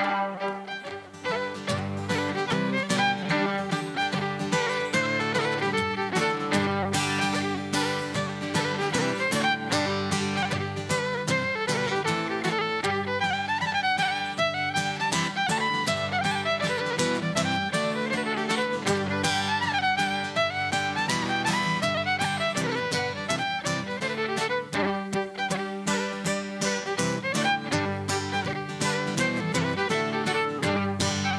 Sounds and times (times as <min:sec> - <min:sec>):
Music: 0:00.0 - 0:31.3.